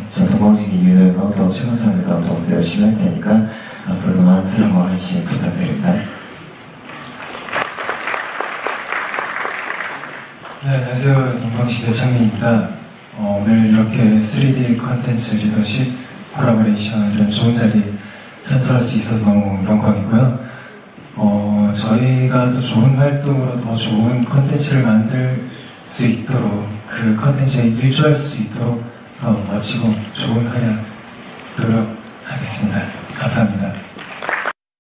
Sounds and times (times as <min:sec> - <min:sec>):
Male speech, man speaking: 0:00.0 - 0:06.2, 0:10.6 - 0:20.4, 0:21.2 - 0:30.9, 0:31.6 - 0:33.9
Narration, monologue: 0:00.0 - 0:06.8, 0:10.4 - 0:34.0.